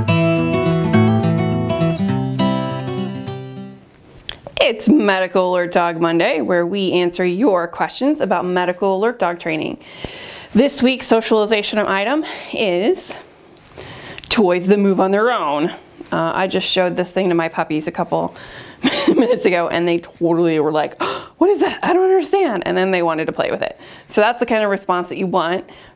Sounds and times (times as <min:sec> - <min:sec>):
Speech: 0:04.6 - 0:09.8, 0:10.6 - 0:13.2, 0:14.3 - 0:18.3, 0:19.2 - 0:25.7.